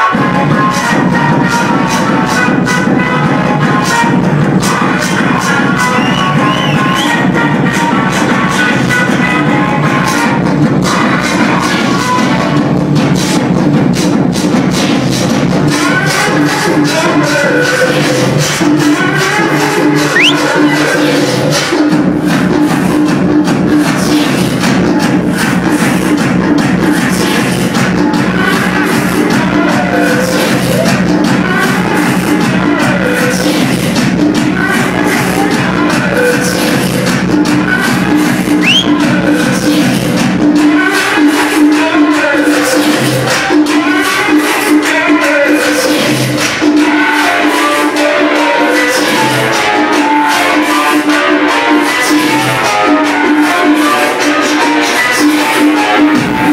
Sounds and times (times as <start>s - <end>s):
Techno: 0.0s - 56.5s.